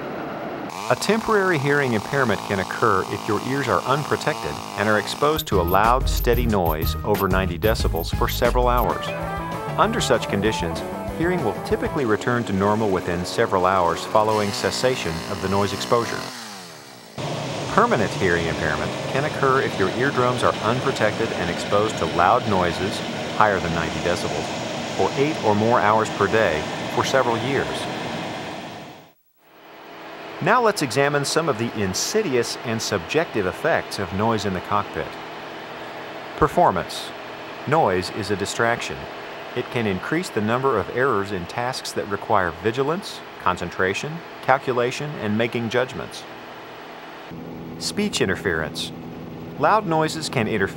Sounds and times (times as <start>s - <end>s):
Speech: 0.9s - 9.2s, 9.8s - 16.3s, 17.7s - 27.9s, 30.4s - 35.2s, 36.4s - 46.3s, 47.8s - 48.9s, 49.6s - 50.7s.